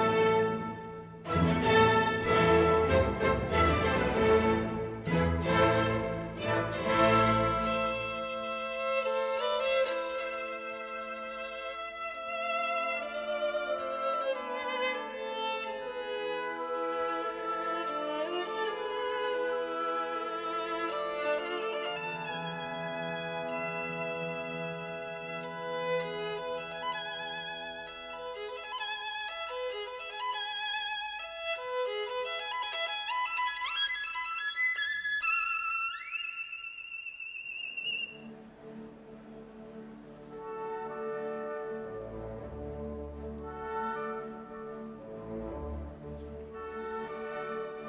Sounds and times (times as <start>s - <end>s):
Violin, fiddle: 0.0s - 45.1s
Classical music: 0.0s - 47.8s
Orchestra: 0.0s - 47.8s.